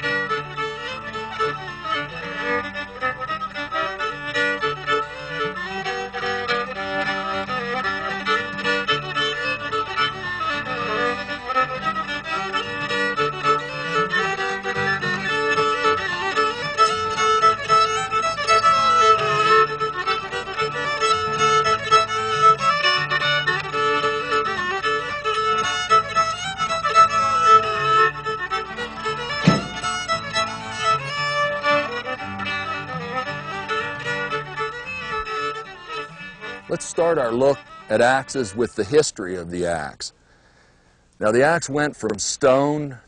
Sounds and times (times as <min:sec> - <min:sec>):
Music: 0:00.0 - 0:40.0.